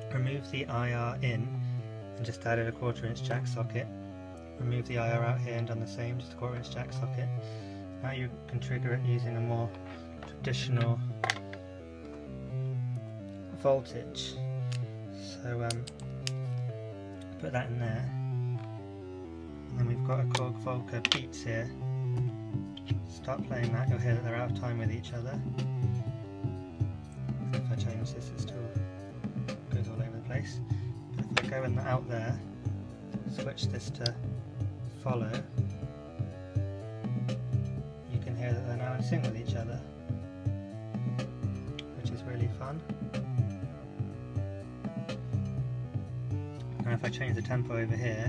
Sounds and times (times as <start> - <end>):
Speech: 0.0 - 1.6, 2.2 - 3.9, 4.6 - 7.4, 8.0 - 11.1, 13.5 - 14.4, 15.2 - 15.9, 17.4 - 18.2, 19.7 - 21.8, 23.1 - 25.5, 27.6 - 28.8, 29.7 - 30.6, 31.2 - 32.5, 33.2 - 34.2, 35.0 - 35.5, 38.1 - 39.9, 41.9 - 42.8, 46.8 - 48.2
Music: 0.0 - 48.2.